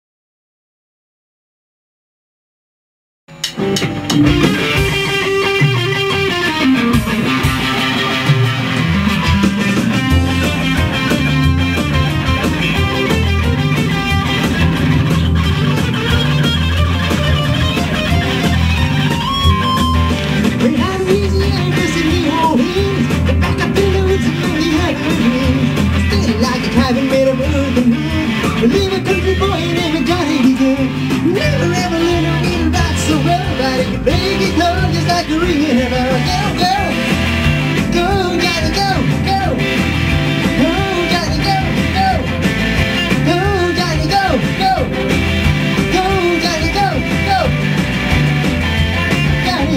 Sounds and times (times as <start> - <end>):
Electric guitar: 3.3 - 49.7.